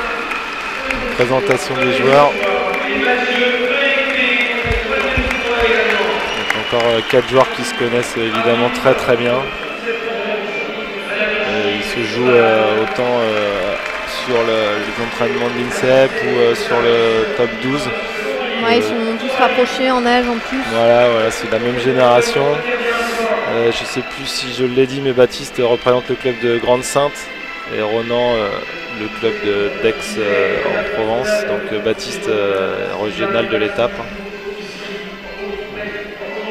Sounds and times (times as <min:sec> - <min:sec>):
Speech: 0:00.9 - 0:10.4, 0:11.1 - 0:36.5.